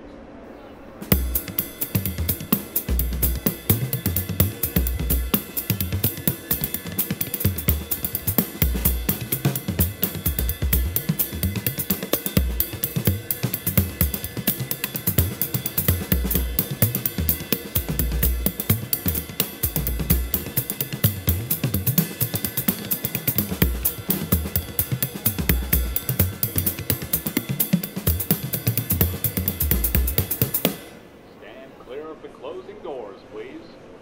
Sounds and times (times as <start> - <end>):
Hi-hat: 1.0 - 31.0.